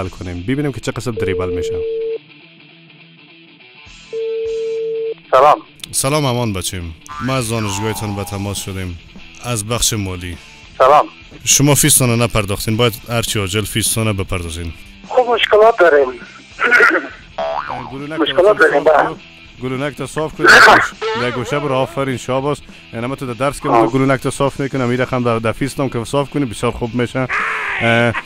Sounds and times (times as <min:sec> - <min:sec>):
Speech: 0:00.0 - 0:01.8, 0:05.4 - 0:17.2, 0:17.8 - 0:28.2
Music: 0:00.0 - 0:28.2.